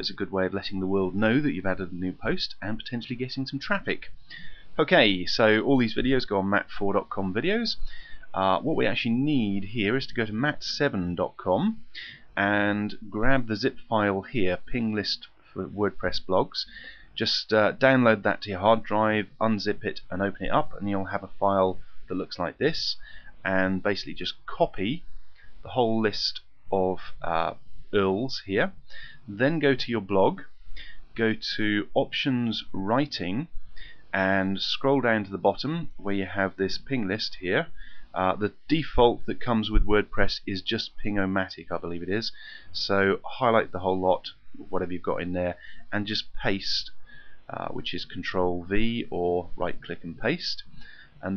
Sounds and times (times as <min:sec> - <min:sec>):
Speech: 0:00.0 - 0:04.2, 0:04.8 - 0:25.1, 0:25.7 - 0:30.5, 0:31.1 - 0:51.3.